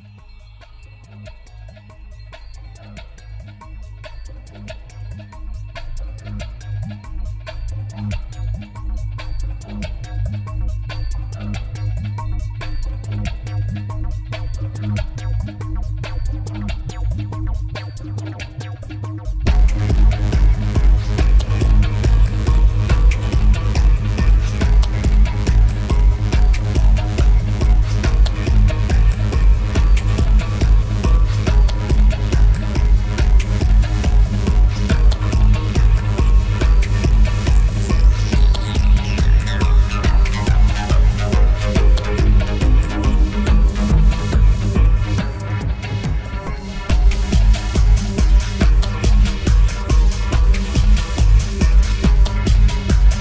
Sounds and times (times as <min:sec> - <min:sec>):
Electronica: 0:00.0 - 0:53.2
Techno: 0:00.0 - 0:53.2
Trance music: 0:00.0 - 0:53.2
Dubstep: 0:06.0 - 0:53.2
Soundtrack music: 0:15.6 - 0:53.2.